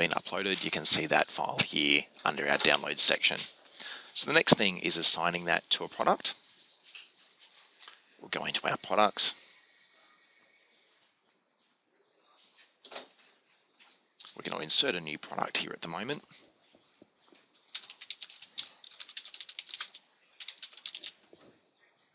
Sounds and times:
Speech: 0.0s - 3.5s, 4.2s - 6.4s, 8.2s - 9.4s, 14.2s - 16.4s
Inside, small room: 0.0s - 22.1s.

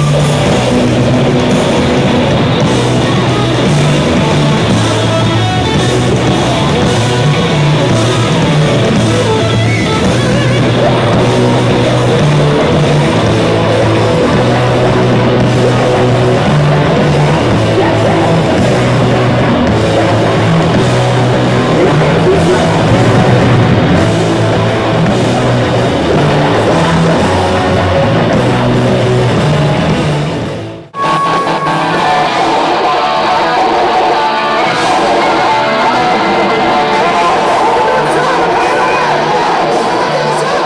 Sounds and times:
Music: 0.0s - 40.6s.

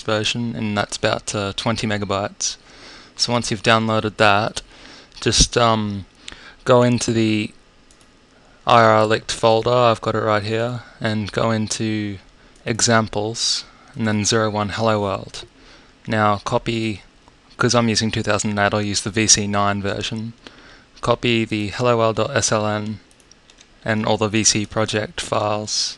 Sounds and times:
Speech: 0.0s - 2.6s, 3.2s - 4.6s, 5.2s - 7.6s, 8.7s - 15.5s, 16.1s - 20.4s, 21.0s - 23.0s, 23.8s - 25.9s.

